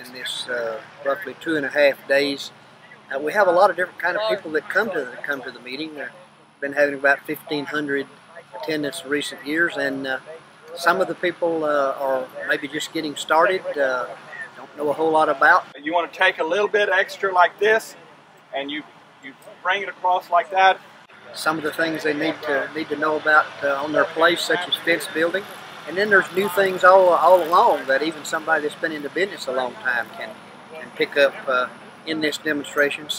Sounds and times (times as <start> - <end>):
Speech: 0.0 - 2.5, 3.1 - 33.1.